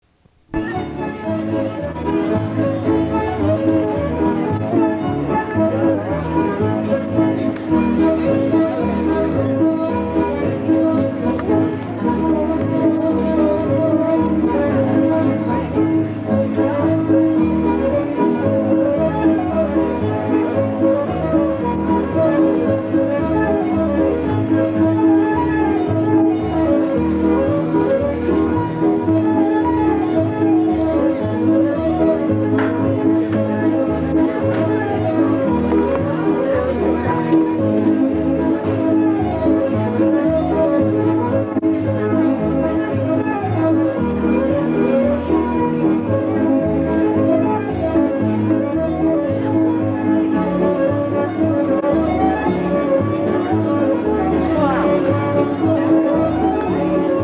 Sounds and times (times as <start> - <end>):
Music: 0.0 - 57.2
Speech: 0.8 - 22.9, 32.2 - 40.7, 52.4 - 57.2.